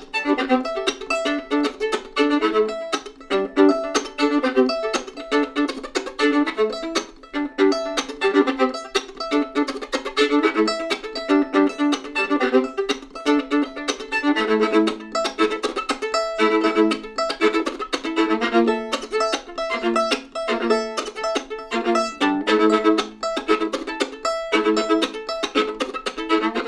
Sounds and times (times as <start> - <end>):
Violin, fiddle: 0.0 - 26.6.